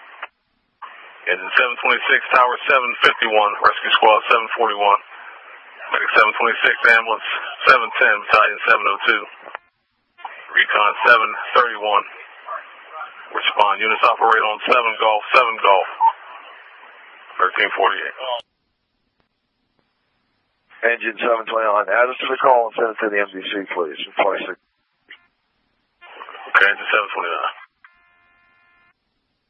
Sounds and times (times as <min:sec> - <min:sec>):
Speech: 0:01.3 - 0:05.1, 0:05.8 - 0:09.4, 0:10.2 - 0:16.5, 0:17.3 - 0:18.5, 0:20.8 - 0:24.6, 0:26.1 - 0:27.7.